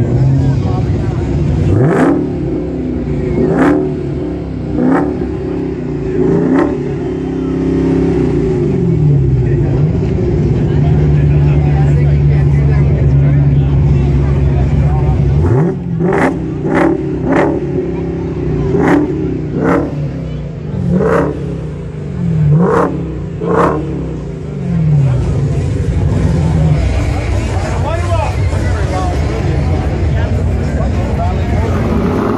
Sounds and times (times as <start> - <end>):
Speech: 0.0 - 1.8, 9.2 - 16.8, 25.0 - 32.3.